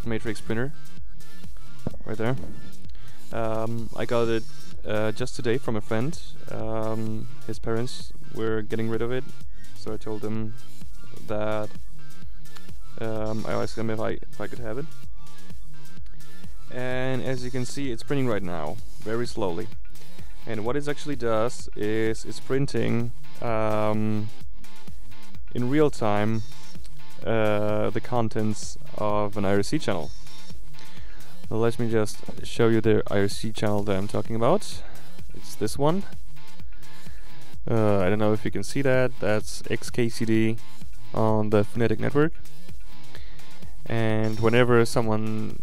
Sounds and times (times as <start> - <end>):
Speech: 0.0 - 0.8, 2.0 - 2.4, 3.3 - 10.6, 11.2 - 11.8, 13.0 - 14.9, 16.7 - 19.7, 20.5 - 24.3, 25.5 - 26.4, 27.2 - 30.1, 31.5 - 36.1, 37.6 - 42.4, 43.9 - 45.6
Music: 0.0 - 45.6.